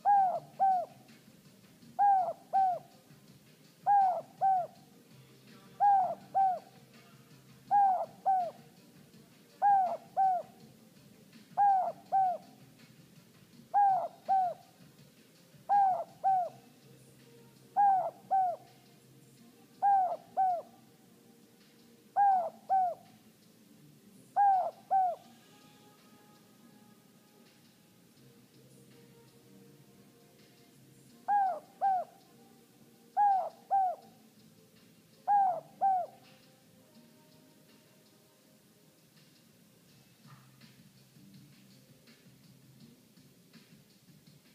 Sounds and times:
Coo: 0:00.0 - 0:01.1, 0:02.0 - 0:03.0, 0:03.8 - 0:04.9, 0:05.7 - 0:10.7, 0:11.6 - 0:12.6, 0:13.7 - 0:14.8, 0:15.7 - 0:16.7, 0:17.7 - 0:19.0, 0:19.8 - 0:20.9, 0:22.2 - 0:23.2, 0:24.4 - 0:25.4, 0:31.2 - 0:32.4, 0:33.1 - 0:34.2, 0:35.2 - 0:36.5.

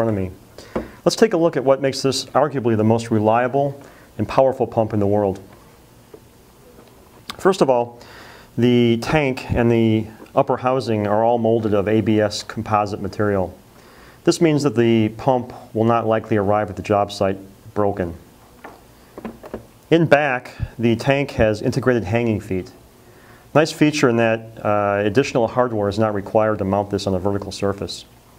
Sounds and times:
Speech: 0:00.0 - 0:00.4, 0:01.0 - 0:05.5, 0:07.3 - 0:08.0, 0:08.6 - 0:13.6, 0:14.2 - 0:18.2, 0:19.9 - 0:22.8, 0:23.5 - 0:28.1.

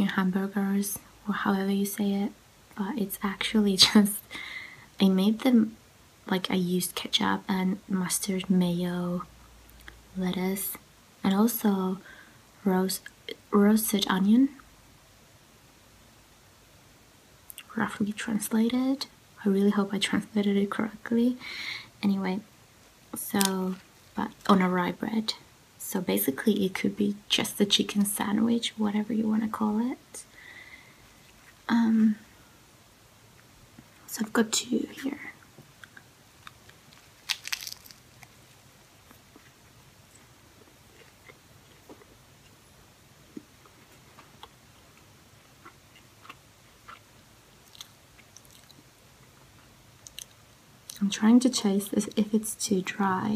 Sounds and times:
Speech: 0:00.0 - 0:04.2, 0:05.0 - 0:09.3, 0:10.2 - 0:12.0, 0:12.6 - 0:14.6, 0:17.7 - 0:21.4, 0:22.0 - 0:22.5, 0:23.2 - 0:30.3, 0:31.7 - 0:32.2, 0:34.1 - 0:35.4, 0:50.9 - 0:53.3
Inside, small room: 0:00.0 - 0:53.3
Biting: 0:37.2 - 0:38.0.

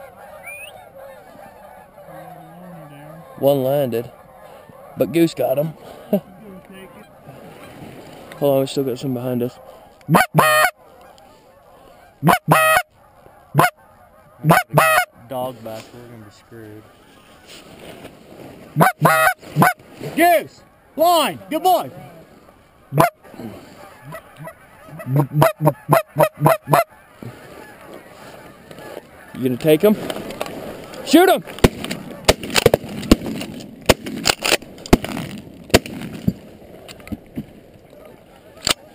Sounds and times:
Honk: 0:00.0 - 0:08.6, 0:09.2 - 0:17.6, 0:18.5 - 0:32.3, 0:38.0 - 0:38.9.

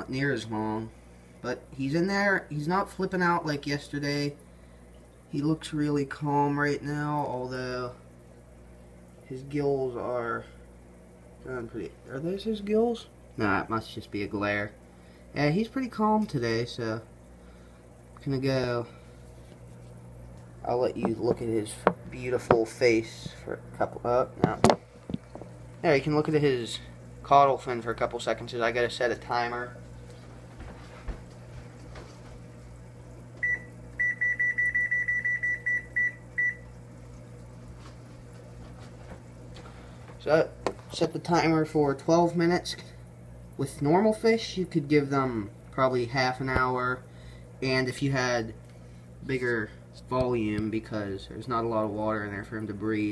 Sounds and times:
Speech: 0:00.0 - 0:04.4, 0:05.3 - 0:08.0, 0:09.3 - 0:10.6, 0:11.4 - 0:14.8, 0:15.4 - 0:17.1, 0:18.2 - 0:19.0, 0:20.6 - 0:24.7, 0:25.8 - 0:29.8, 0:40.2 - 0:42.9, 0:43.6 - 0:48.6, 0:49.2 - 0:53.1
Beep, bleep: 0:33.4 - 0:36.6.

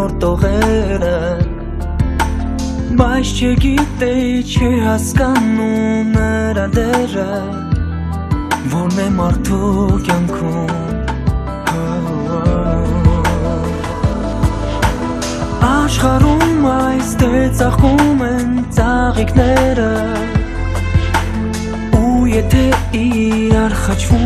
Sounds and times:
Music: 0:00.0 - 0:24.2.

